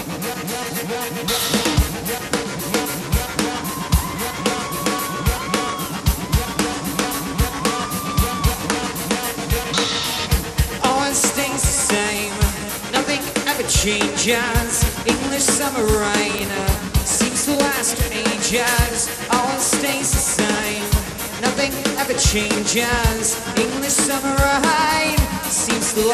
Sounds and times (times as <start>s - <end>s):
Music: 0.0s - 26.1s.